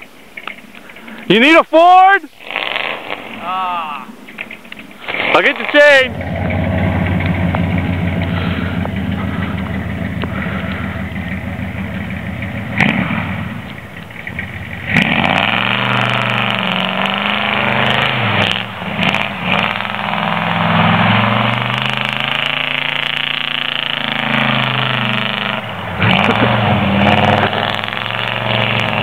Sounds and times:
Car: 0.0s - 1.6s, 2.4s - 29.0s.

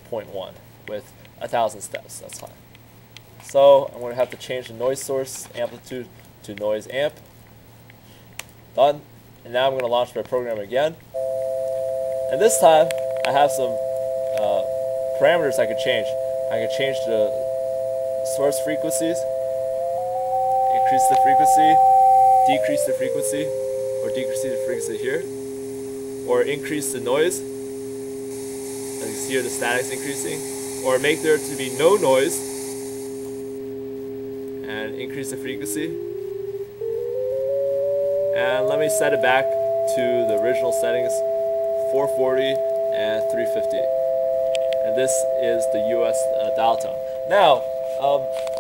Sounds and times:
Speech: 0.0s - 2.6s, 3.4s - 7.2s, 8.8s - 11.0s, 12.3s - 13.8s, 14.4s - 17.4s, 18.2s - 19.3s, 20.7s - 21.8s, 22.4s - 25.3s, 26.3s - 27.4s, 29.0s - 32.4s, 34.6s - 36.0s, 38.4s - 41.2s, 41.9s - 43.9s, 44.8s - 48.3s
Radio: 12.3s - 17.5s, 18.1s - 25.4s, 26.2s - 27.5s, 29.0s - 32.6s, 34.7s - 36.0s, 38.4s - 48.6s
Music: 19.3s - 27.0s, 35.6s - 48.6s.

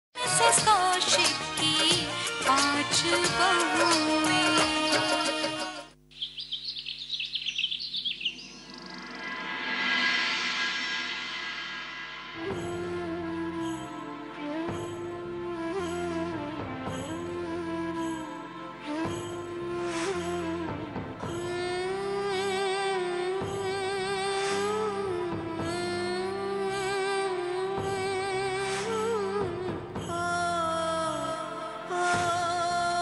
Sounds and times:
Music: 0.2s - 6.0s, 9.0s - 33.0s.

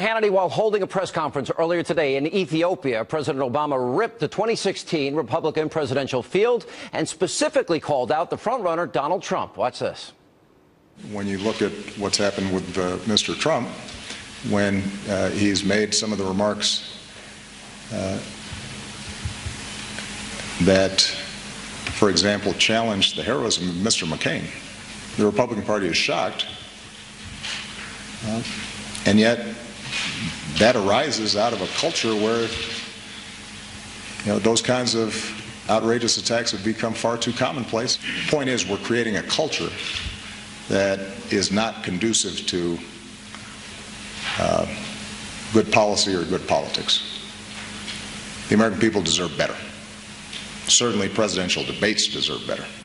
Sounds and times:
Speech: 0.0s - 10.2s, 11.0s - 17.0s, 17.9s - 18.4s, 20.6s - 21.3s, 21.9s - 26.6s, 28.2s - 32.8s, 34.2s - 39.8s, 40.7s - 42.9s, 44.3s - 47.2s, 48.5s - 49.8s, 50.7s - 52.8s.

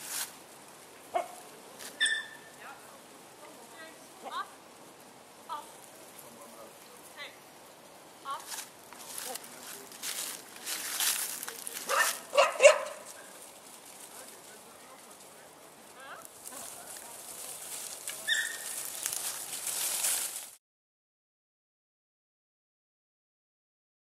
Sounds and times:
Speech: 14.1s - 18.4s.

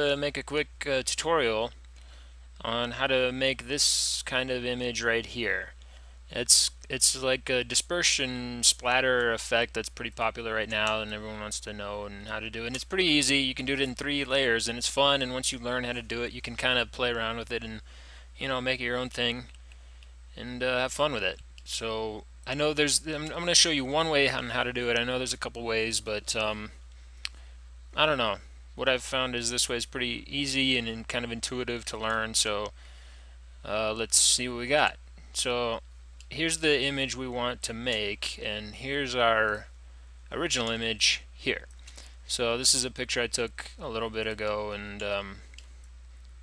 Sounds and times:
Speech: 0.0s - 1.8s, 2.6s - 17.8s, 18.4s - 19.5s, 20.4s - 26.8s, 28.0s - 32.8s, 33.6s - 39.7s, 40.3s - 41.7s, 42.3s - 45.5s.

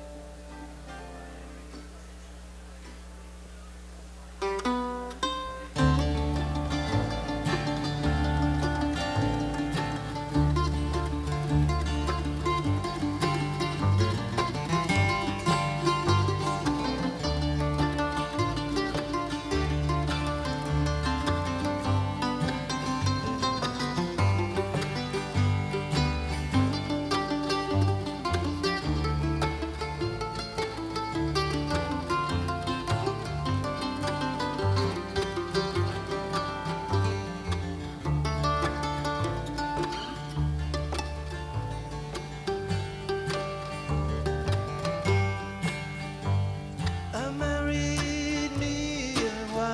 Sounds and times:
Music: 0.0s - 2.3s, 4.4s - 49.7s.

